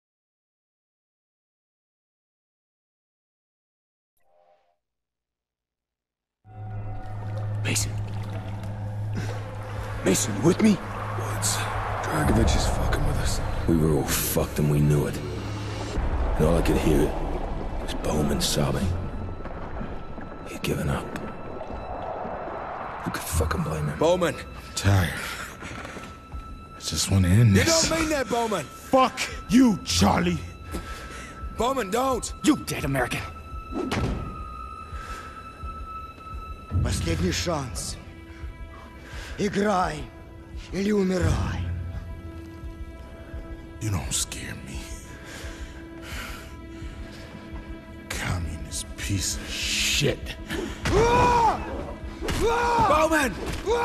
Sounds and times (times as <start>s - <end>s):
Music: 6.4s - 53.8s
Speech: 10.1s - 15.3s, 16.4s - 17.2s, 26.8s - 30.5s, 36.8s - 38.0s, 39.4s - 40.1s, 40.7s - 41.7s, 48.1s - 50.4s.